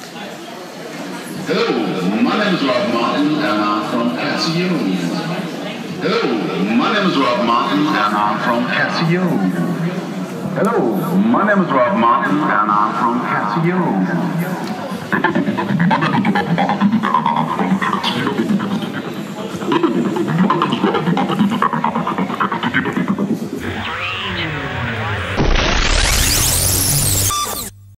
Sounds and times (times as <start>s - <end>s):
Sampler: 23.6s - 27.9s.